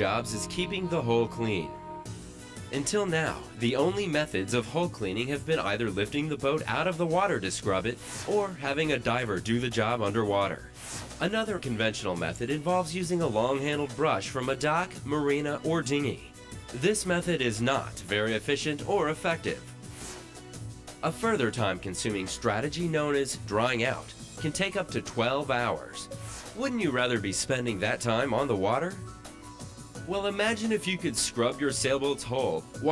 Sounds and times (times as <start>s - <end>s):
Speech: 0.0s - 1.8s, 2.7s - 10.6s, 11.2s - 19.6s, 21.0s - 29.0s, 30.1s - 32.9s
Music: 0.0s - 32.9s.